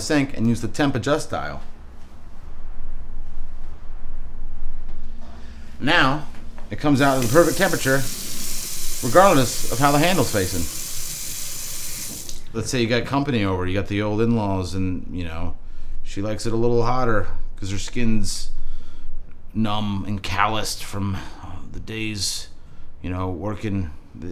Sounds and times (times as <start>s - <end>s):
Sink (filling or washing): 7.0s - 12.5s
Water tap, faucet: 7.0s - 12.5s.